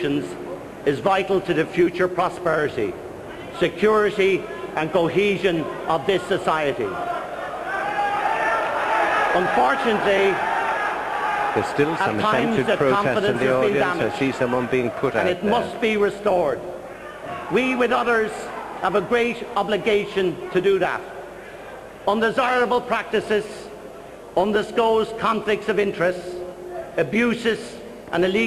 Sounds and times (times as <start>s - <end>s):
Male speech, man speaking: 0.0s - 7.0s, 9.3s - 10.4s, 11.6s - 16.7s, 17.5s - 21.1s, 22.1s - 23.7s, 24.4s - 28.4s
Narration, monologue: 0.0s - 7.0s, 9.3s - 10.5s, 11.6s - 16.9s, 17.5s - 28.4s.